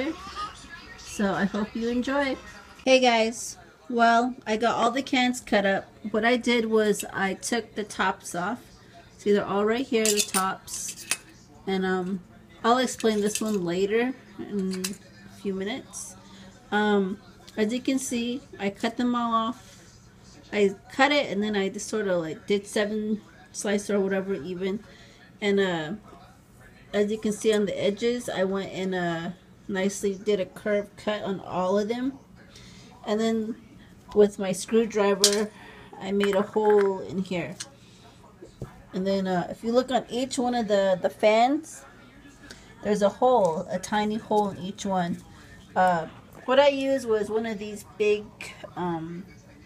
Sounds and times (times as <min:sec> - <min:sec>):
Speech: 0:00.0 - 0:49.6.